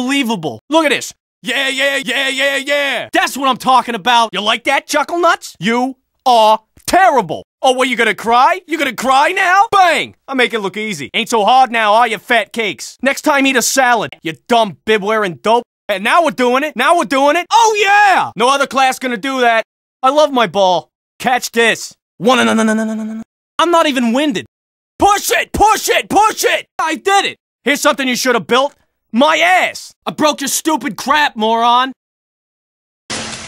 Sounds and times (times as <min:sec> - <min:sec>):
Speech: 0:00.0 - 0:22.7, 0:23.6 - 0:32.0.